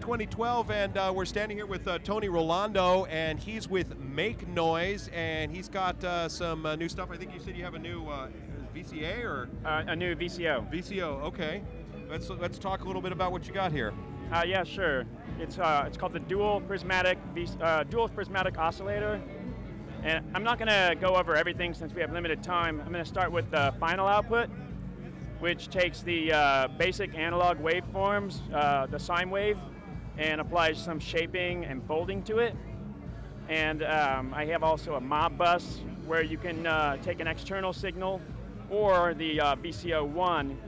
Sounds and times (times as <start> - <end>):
Speech: 0.0 - 19.2, 20.0 - 24.7, 25.4 - 32.7, 33.5 - 40.6
Music: 0.0 - 40.6.